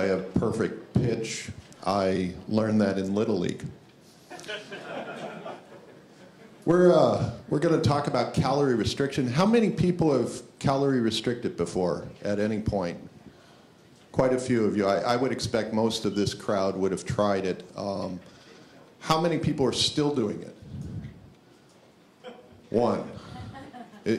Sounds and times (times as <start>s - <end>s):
Speech: 0.0s - 3.8s, 6.6s - 13.1s, 14.1s - 18.2s, 19.0s - 20.6s, 22.7s - 23.2s.